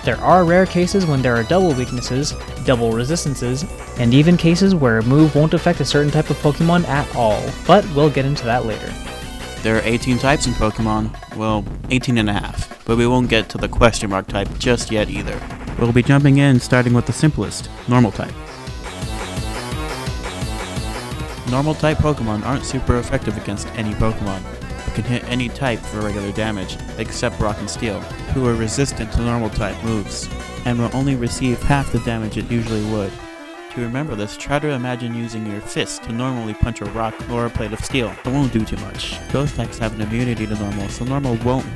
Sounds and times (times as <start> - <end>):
Speech: 0.0 - 9.0, 9.6 - 18.4, 21.5 - 41.7
Music: 0.0 - 41.7.